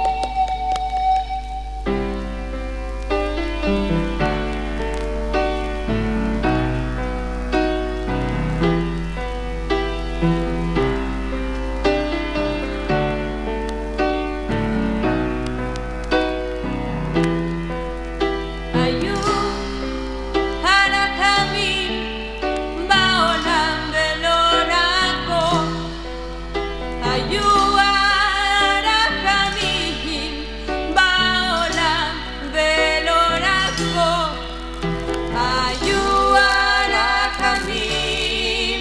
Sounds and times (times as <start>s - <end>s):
Music: 0.0s - 38.8s
Singing: 18.8s - 20.0s, 20.6s - 25.9s, 27.0s - 34.6s, 35.3s - 38.8s.